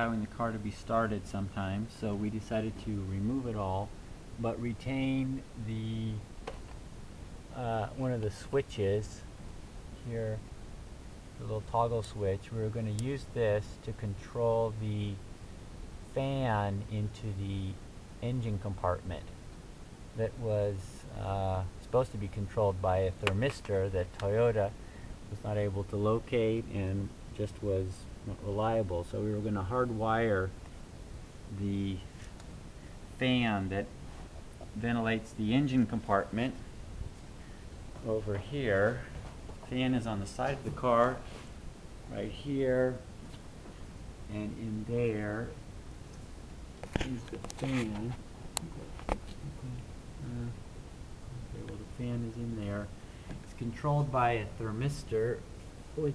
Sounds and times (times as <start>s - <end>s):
Speech: 0.0s - 6.2s, 7.5s - 9.3s, 10.0s - 10.5s, 11.4s - 15.2s, 16.1s - 19.4s, 20.2s - 30.6s, 31.5s - 32.2s, 33.2s - 33.9s, 34.7s - 36.6s, 38.0s - 41.4s, 42.1s - 43.1s, 44.3s - 45.6s, 46.9s - 50.6s, 51.4s - 56.1s.